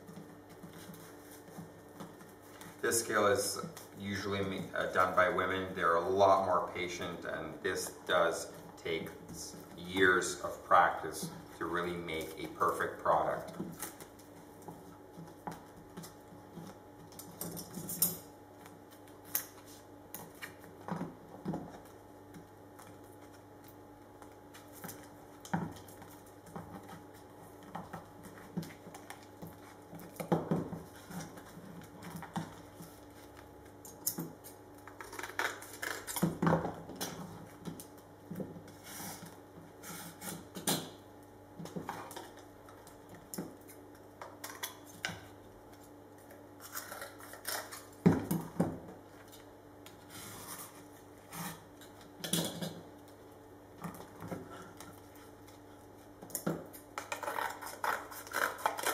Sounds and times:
Inside, small room: 0:00.0 - 0:58.9.

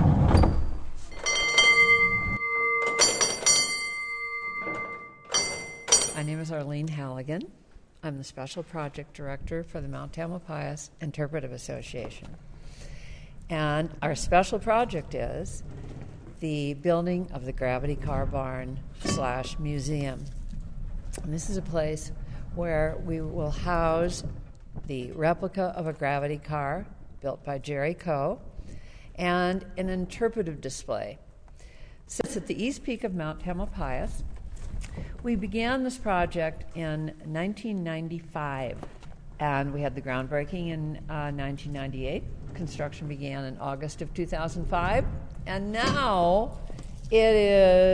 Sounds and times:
Speech: 0:16.4 - 0:20.3, 0:21.2 - 0:24.3, 0:24.9 - 0:28.4, 0:32.1 - 0:34.2, 0:35.3 - 0:38.8, 0:39.4 - 0:47.9.

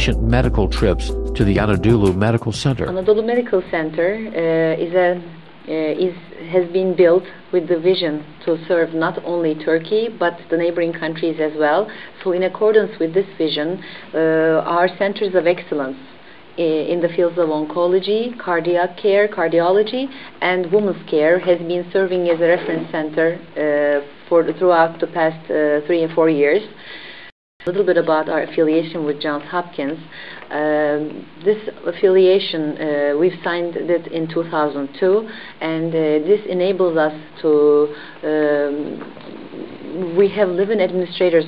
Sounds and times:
Speech: 0:00.0 - 0:26.8, 0:27.7 - 0:39.0, 0:39.8 - 0:41.4.

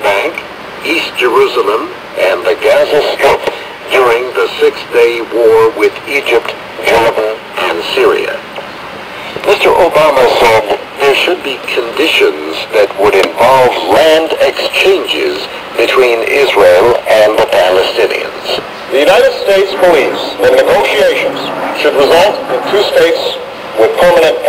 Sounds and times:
Speech: 0:00.0 - 0:08.5, 0:09.3 - 0:24.4.

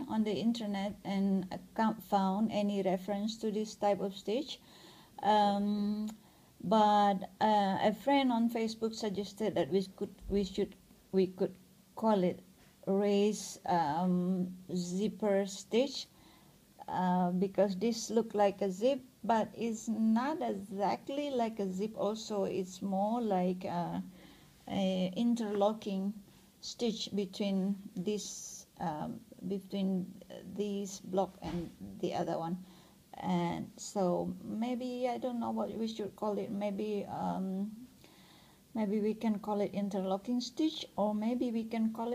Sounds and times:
Speech: 0:00.0 - 0:04.6, 0:05.2 - 0:16.1, 0:16.8 - 0:24.1, 0:24.7 - 0:37.9, 0:38.7 - 0:42.1.

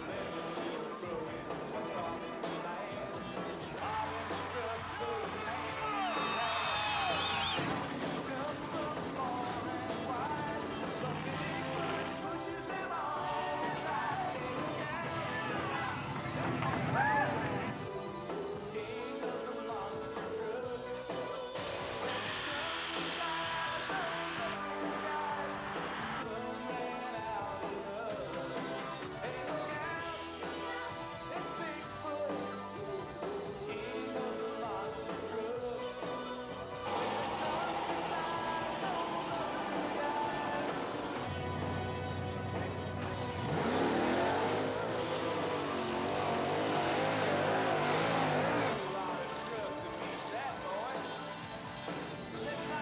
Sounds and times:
Music: 0:00.0 - 0:52.8.

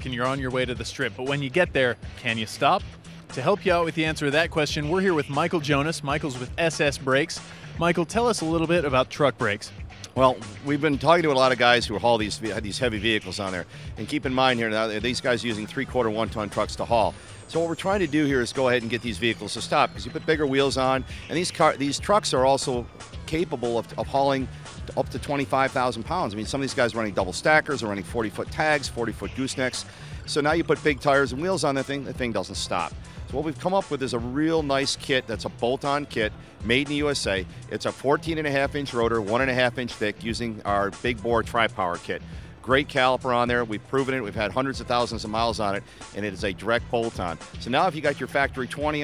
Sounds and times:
Music: 0:00.0 - 0:49.0
Speech: 0:00.0 - 0:49.0.

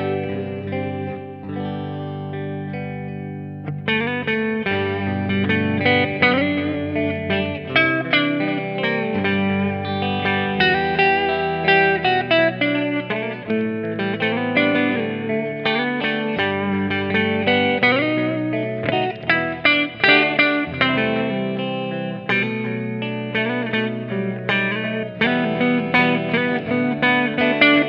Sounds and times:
Guitar: 0:00.0 - 0:27.8.

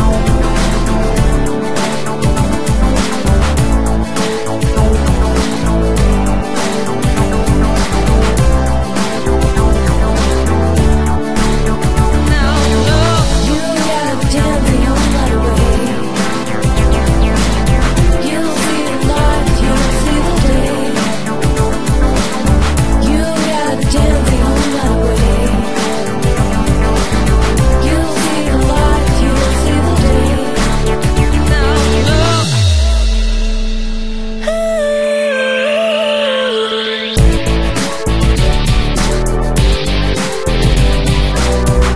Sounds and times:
Music: 0:00.0 - 0:41.9.

